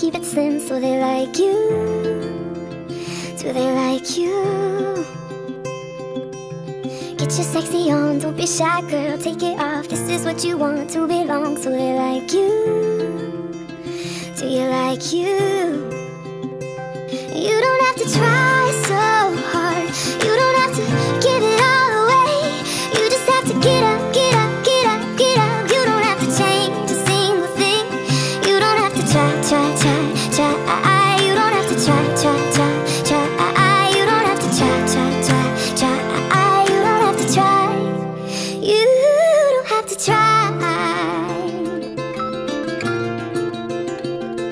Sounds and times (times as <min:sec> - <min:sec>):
Tender music: 0:12.4 - 0:43.6.